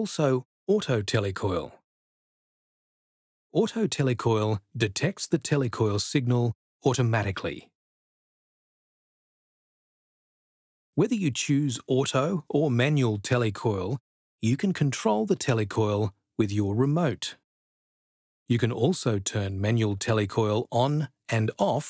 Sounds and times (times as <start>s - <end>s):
Speech: 0.0s - 1.8s, 3.6s - 7.8s, 11.0s - 17.4s, 18.5s - 21.9s.